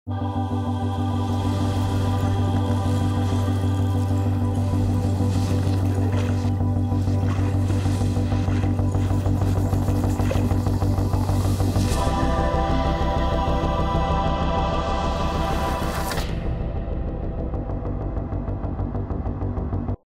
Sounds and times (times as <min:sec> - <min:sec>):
Music: 0:00.1 - 0:20.0.